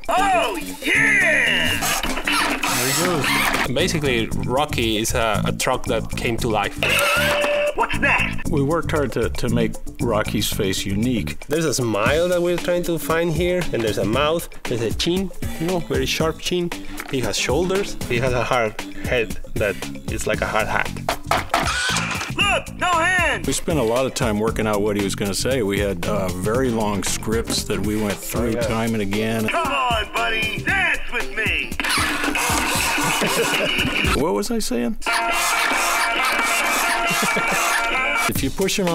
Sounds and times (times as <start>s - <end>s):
Music: 0.0s - 38.9s
Speech: 2.8s - 7.0s, 7.8s - 21.0s, 22.4s - 31.7s, 34.2s - 35.1s, 38.3s - 38.9s.